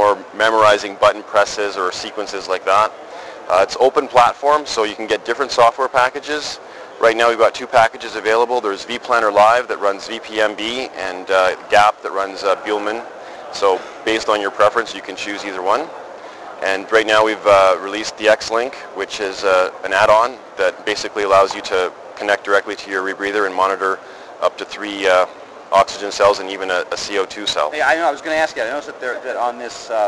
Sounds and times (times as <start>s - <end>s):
Speech: 0.0s - 15.9s, 16.6s - 30.0s.